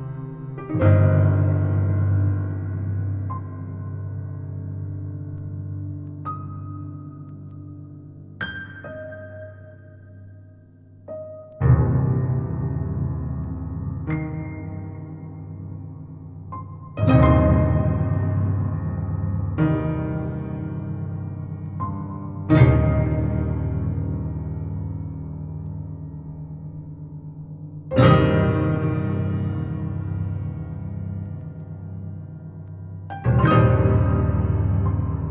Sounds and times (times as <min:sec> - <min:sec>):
Music: 0:00.0 - 0:35.3.